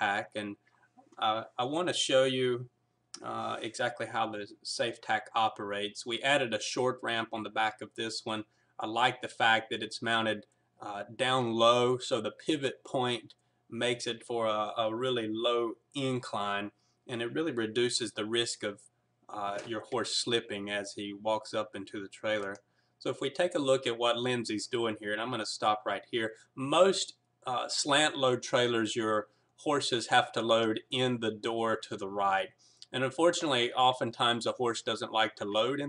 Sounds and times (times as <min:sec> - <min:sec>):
Speech: 0:00.0 - 0:00.6, 0:01.2 - 0:35.8.